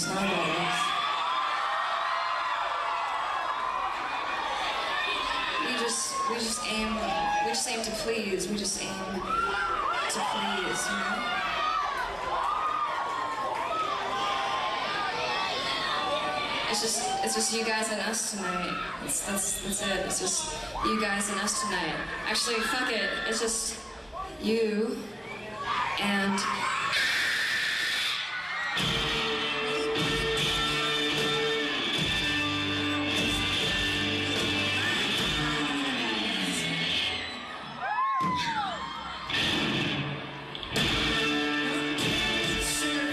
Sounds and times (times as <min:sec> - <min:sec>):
Speech: 0:05.6 - 0:09.3, 0:10.0 - 0:11.4, 0:16.7 - 0:23.8, 0:24.4 - 0:25.1.